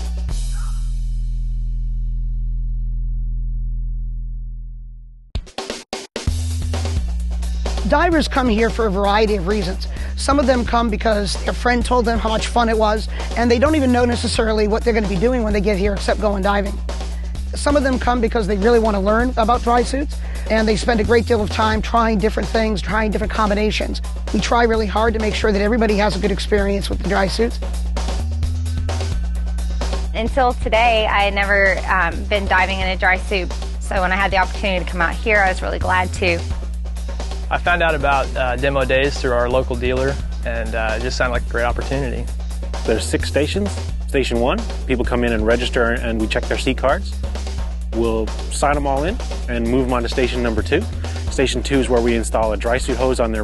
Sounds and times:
Music: 0:00.0 - 0:53.4
Speech: 0:07.9 - 0:16.7, 0:17.6 - 0:27.6, 0:30.2 - 0:36.4, 0:37.5 - 0:42.3, 0:42.9 - 0:47.1, 0:48.0 - 0:53.4.

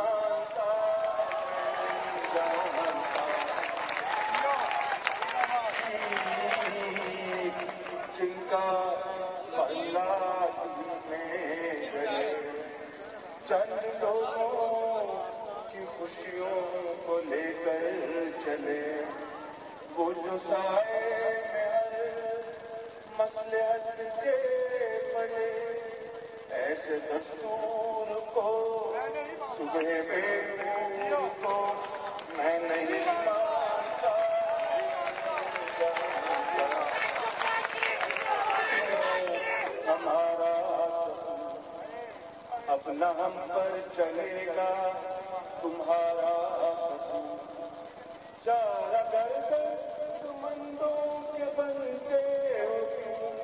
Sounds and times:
Male singing: 0:00.0 - 0:03.8, 0:05.5 - 0:47.6, 0:48.4 - 0:53.4.

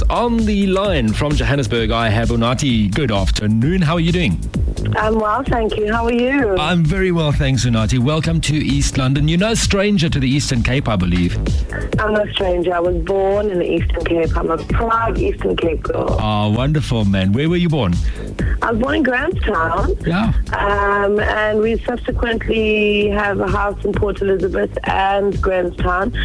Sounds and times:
Music: 0:00.0 - 0:26.2
Speech: 0:00.0 - 0:26.2.

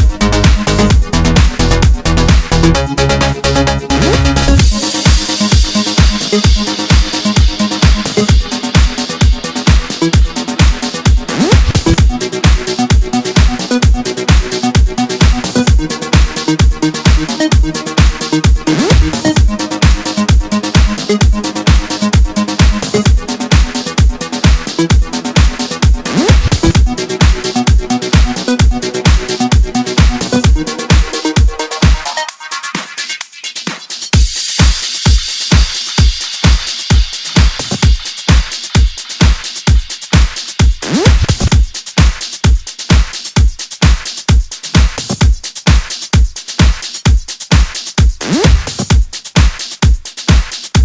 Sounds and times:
Electronica: 0:00.0 - 0:41.8, 0:48.2 - 0:49.2
House music: 0:00.0 - 0:50.8.

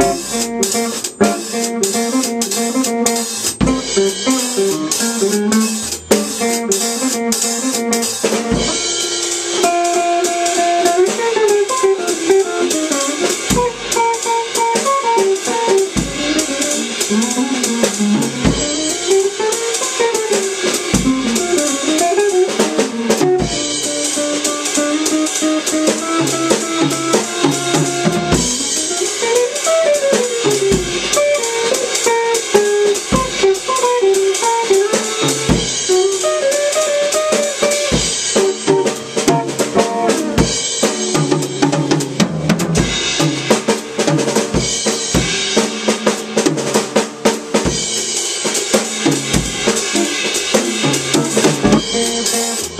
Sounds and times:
Strum: 0:00.0 - 0:43.5, 0:49.0 - 0:52.8
Drum: 0:00.0 - 0:52.8
Drum kit: 0:00.0 - 0:52.8.

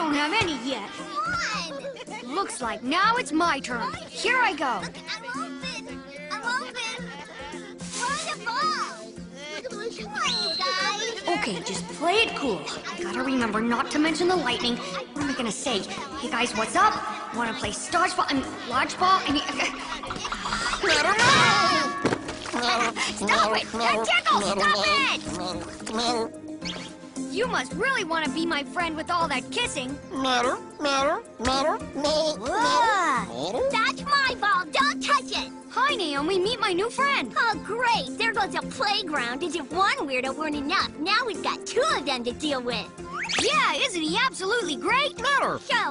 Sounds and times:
Music: 0:00.0 - 0:45.9.

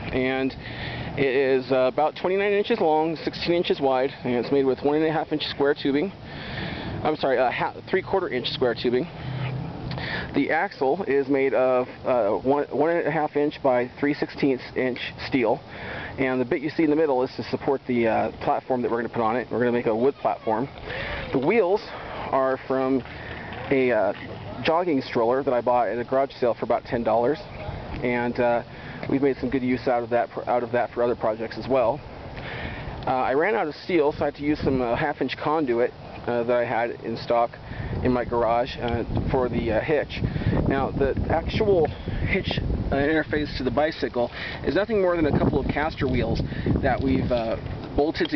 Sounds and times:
Speech: 0:00.0 - 0:00.6, 0:01.2 - 0:06.2, 0:07.0 - 0:09.1, 0:10.3 - 0:15.6, 0:16.2 - 0:32.0, 0:33.0 - 0:48.3.

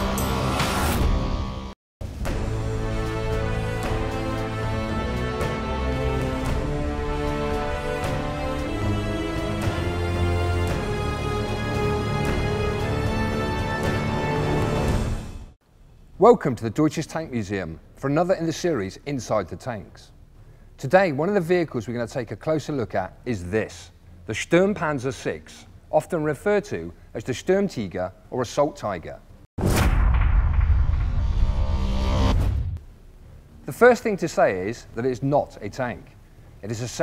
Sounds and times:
Speech: 0:16.2 - 0:20.2, 0:20.8 - 0:29.2, 0:33.6 - 0:37.0.

